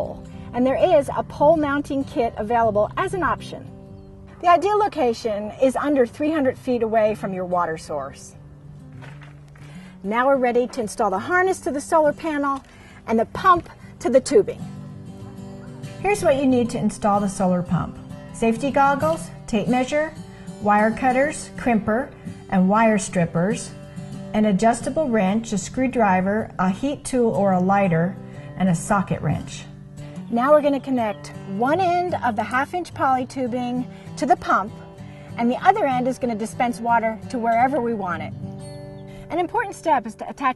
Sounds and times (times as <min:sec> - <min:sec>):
Speech: 0:00.0 - 0:03.7, 0:04.4 - 0:08.4, 0:10.1 - 0:14.6, 0:16.0 - 0:23.7, 0:24.4 - 0:29.7, 0:30.3 - 0:34.7, 0:35.4 - 0:38.3, 0:39.3 - 0:40.5
Music: 0:00.0 - 0:40.5.